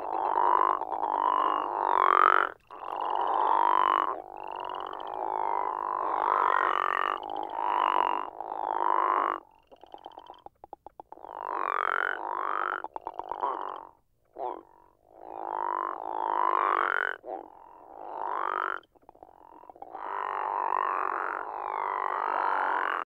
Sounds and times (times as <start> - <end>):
Frog: 0.0 - 23.0.